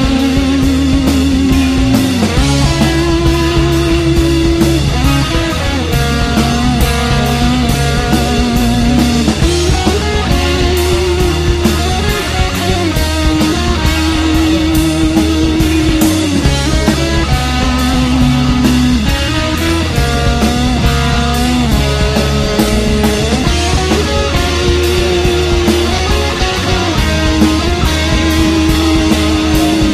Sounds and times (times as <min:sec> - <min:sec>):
Psychedelic rock: 0:00.0 - 0:29.9.